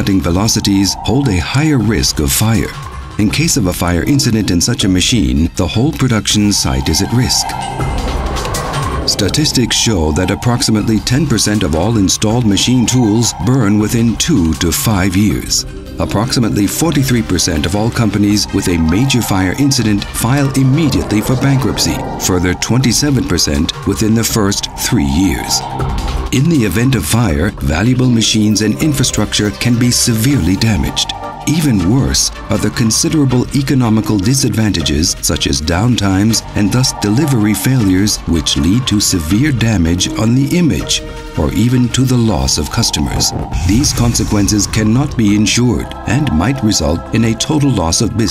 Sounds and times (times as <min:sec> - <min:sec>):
Speech: 0:00.0 - 0:07.6, 0:09.1 - 0:25.7, 0:26.3 - 0:48.3
Music: 0:00.0 - 0:48.3.